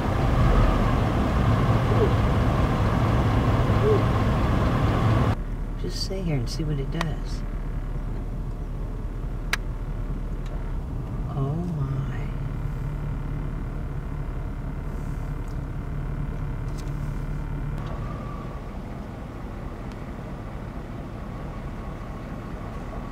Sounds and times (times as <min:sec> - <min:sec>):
Speech: 0:05.8 - 0:07.4, 0:11.3 - 0:12.4.